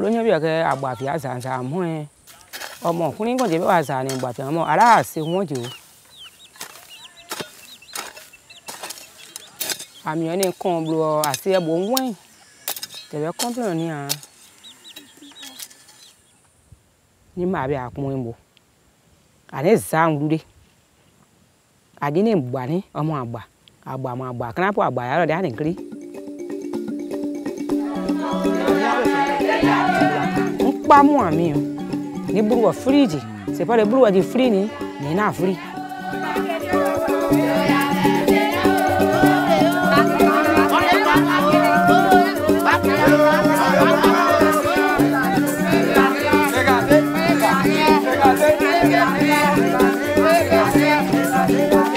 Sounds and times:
Outside, rural or natural: 0.0 - 51.9.

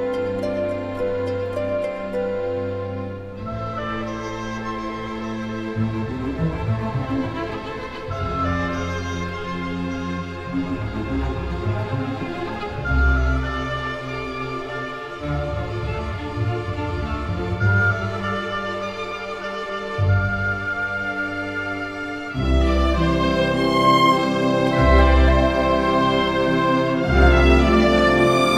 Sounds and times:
Music: 0.0 - 28.5.

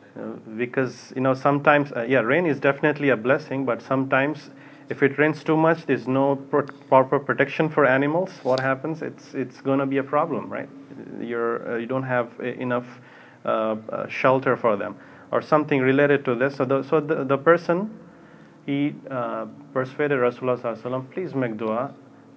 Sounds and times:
Speech: 0.2 - 18.0, 18.7 - 22.0.

